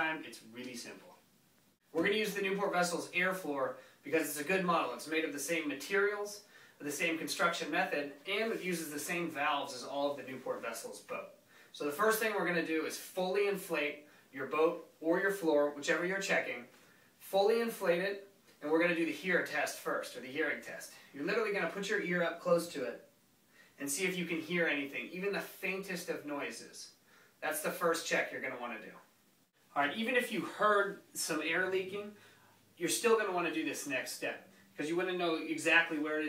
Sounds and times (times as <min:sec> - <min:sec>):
Speech: 0:00.0 - 0:01.2, 0:01.9 - 0:23.1, 0:23.8 - 0:29.1, 0:29.7 - 0:32.2, 0:32.8 - 0:36.2.